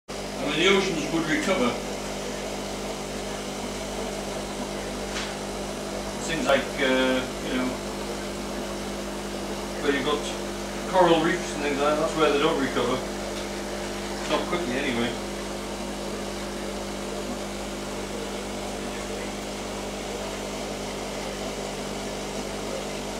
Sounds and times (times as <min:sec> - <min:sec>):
Speech: 0:00.4 - 0:05.4, 0:06.2 - 0:08.9, 0:09.5 - 0:13.2, 0:14.2 - 0:15.2, 0:16.0 - 0:23.1.